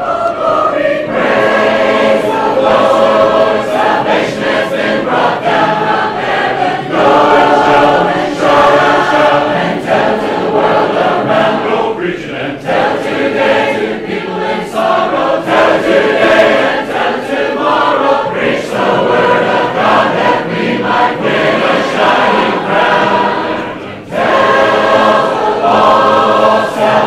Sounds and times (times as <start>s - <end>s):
Choir: 0.0s - 27.0s.